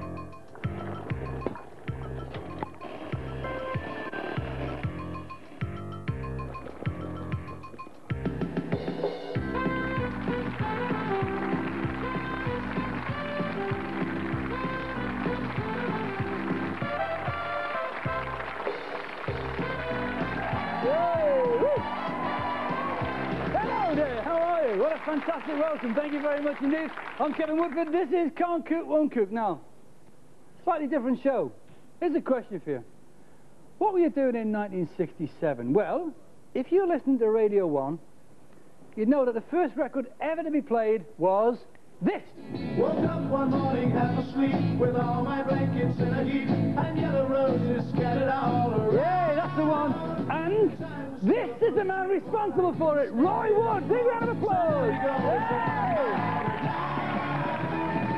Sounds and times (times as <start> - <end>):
Speech: 23.8 - 29.7, 30.6 - 32.9, 33.8 - 38.0, 39.0 - 42.3, 50.3 - 55.4.